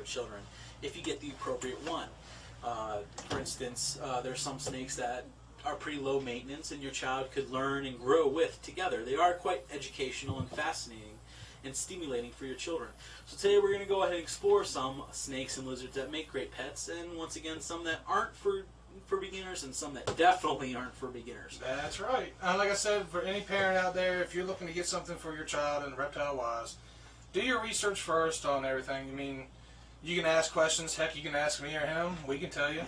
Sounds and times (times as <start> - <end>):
Inside, small room: 0.0 - 32.8
Speech: 0.0 - 32.8.